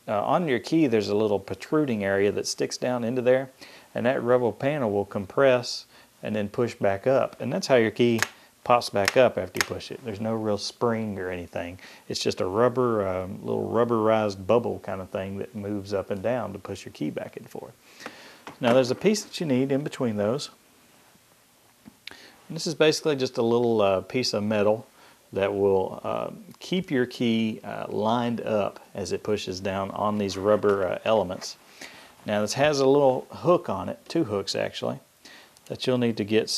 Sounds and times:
Speech: 0:00.0 - 0:17.8, 0:18.6 - 0:20.6, 0:22.5 - 0:31.6, 0:32.2 - 0:35.1, 0:35.7 - 0:36.5.

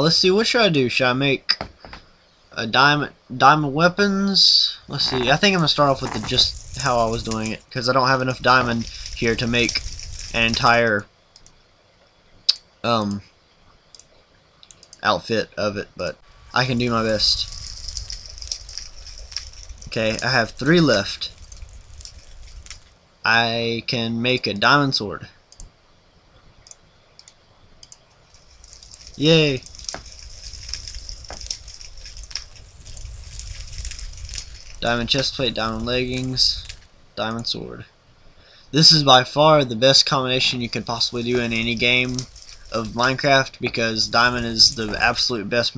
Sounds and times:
Speech: 0:00.0 - 0:01.6, 0:02.6 - 0:09.8, 0:10.4 - 0:11.1, 0:12.9 - 0:13.3, 0:15.0 - 0:17.5, 0:19.9 - 0:21.3, 0:23.3 - 0:25.4, 0:29.2 - 0:29.7, 0:34.8 - 0:37.9, 0:38.7 - 0:45.7.

